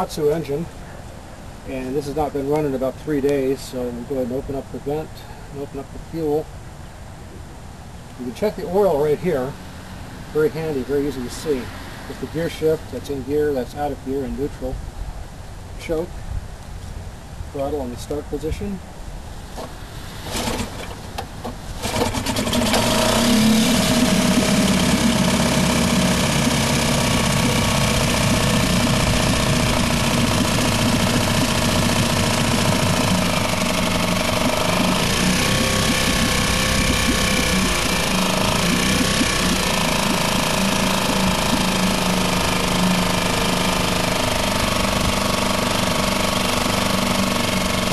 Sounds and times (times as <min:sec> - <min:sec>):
Medium engine (mid frequency): 0:19.3 - 0:47.9
Idling: 0:21.8 - 0:47.9.